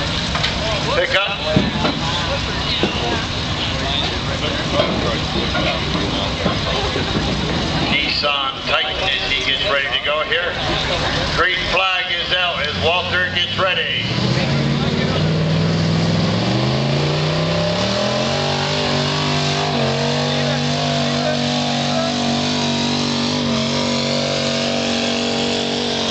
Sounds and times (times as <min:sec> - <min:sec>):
Car: 0:00.0 - 0:26.1
Speech: 0:00.6 - 0:15.4.